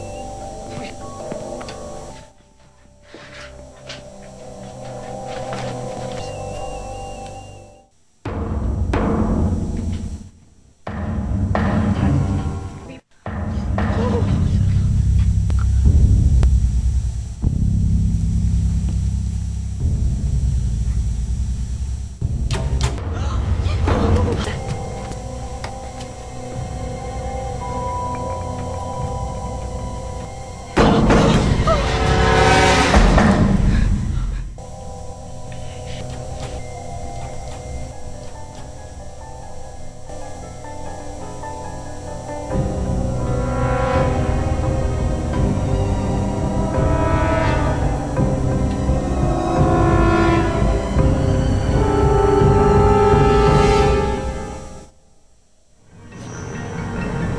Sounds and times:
Music: 0:00.0 - 0:55.1, 0:55.7 - 0:57.3
Speech: 0:11.9 - 0:13.1, 0:13.9 - 0:15.0.

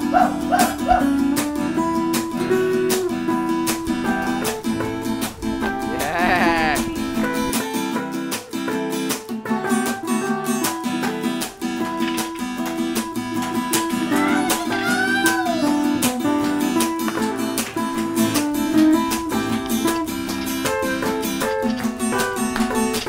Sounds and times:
Ukulele: 0:00.0 - 0:23.0.

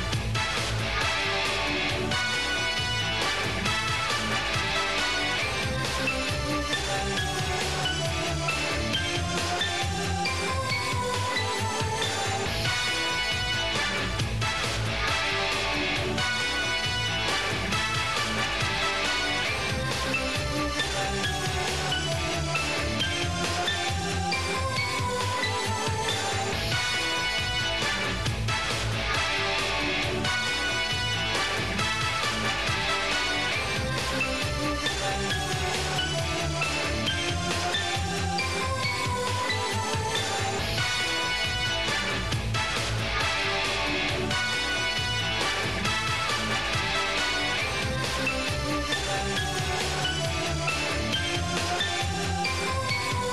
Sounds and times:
Music: 0:00.0 - 0:53.3.

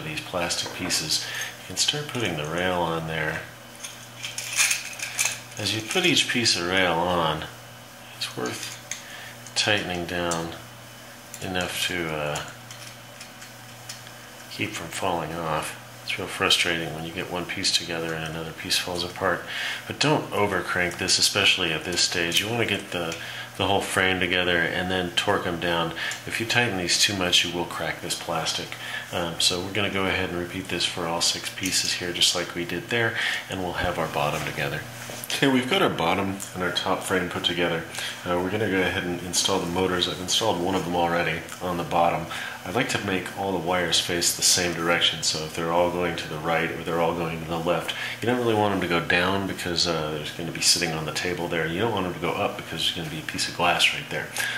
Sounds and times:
Speech: 0:00.0 - 0:03.6, 0:05.6 - 0:07.6, 0:08.2 - 0:08.8, 0:09.6 - 0:10.7, 0:11.4 - 0:12.6, 0:14.5 - 0:54.5.

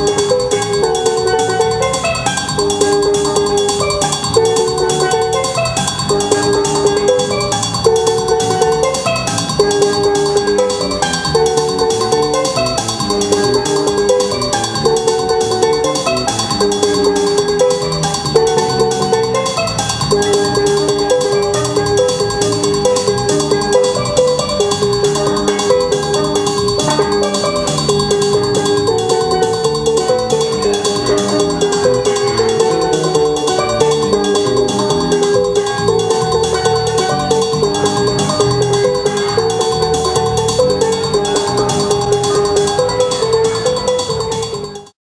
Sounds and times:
Music: 0:00.0 - 0:45.0.

